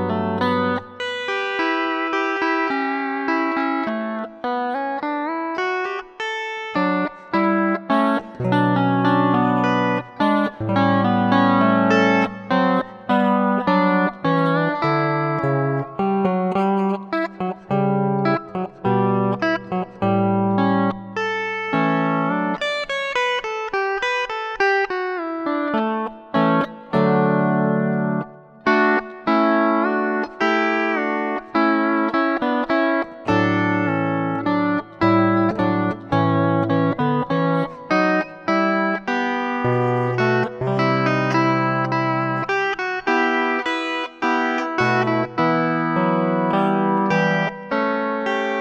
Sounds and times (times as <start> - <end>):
Distortion: 0.0 - 48.6
Music: 0.0 - 48.6.